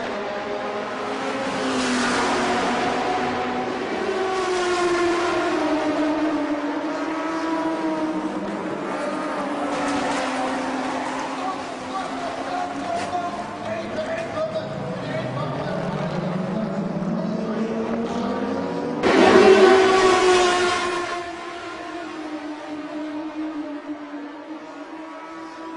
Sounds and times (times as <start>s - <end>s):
Car passing by: 0.8s - 6.2s, 6.8s - 22.3s.